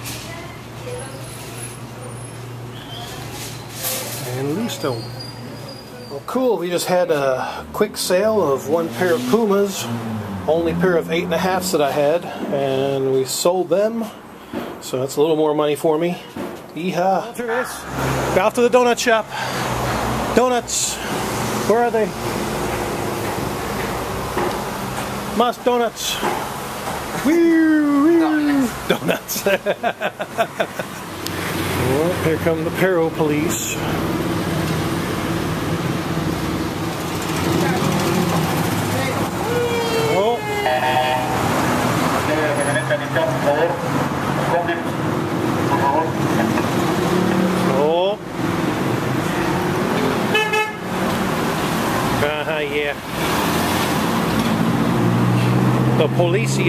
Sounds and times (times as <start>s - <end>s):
Car: 0.0s - 15.0s, 16.2s - 56.6s
Outside, urban or manmade: 0.0s - 56.6s
Speech: 10.5s - 14.2s, 25.4s - 26.3s, 27.2s - 29.2s, 31.8s - 33.9s, 52.2s - 53.0s, 56.0s - 56.6s.